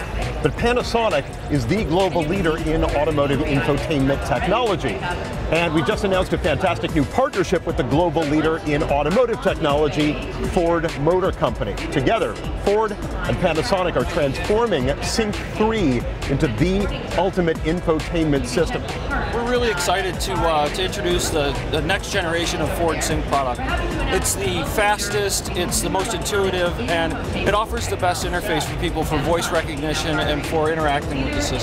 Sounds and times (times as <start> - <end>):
Music: 0.0 - 31.6
Speech: 0.0 - 31.6.